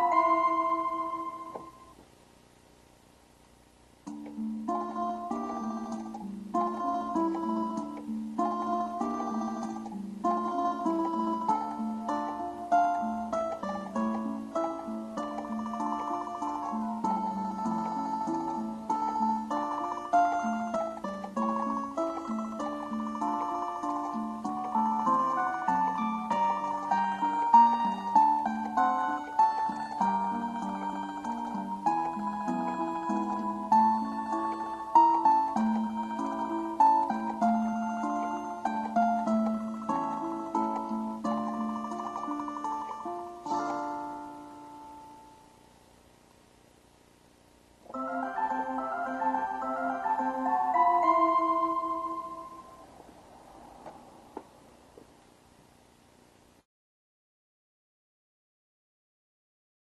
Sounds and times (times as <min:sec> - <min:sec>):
Music: 0:00.0 - 0:02.0, 0:04.0 - 0:45.7, 0:47.8 - 0:53.0.